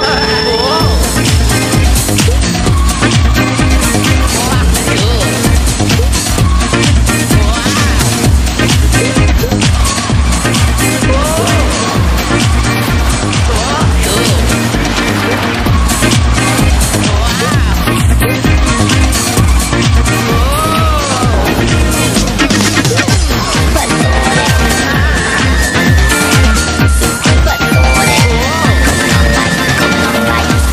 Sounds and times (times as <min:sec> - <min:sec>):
Music: 0:00.0 - 0:30.7.